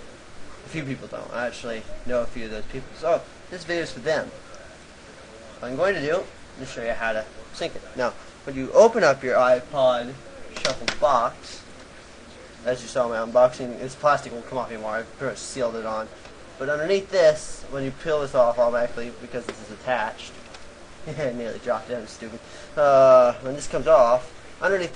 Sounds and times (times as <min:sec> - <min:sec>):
Speech: 0:00.0 - 0:20.4, 0:21.1 - 0:24.9.